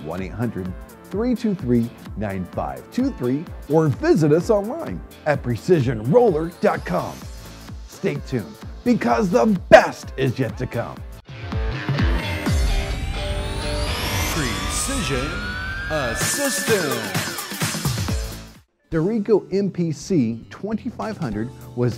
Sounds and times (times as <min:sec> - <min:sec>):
Speech: 0:00.0 - 0:07.2, 0:07.9 - 0:11.0, 0:14.3 - 0:17.2, 0:18.9 - 0:21.9
Music: 0:00.0 - 0:21.9.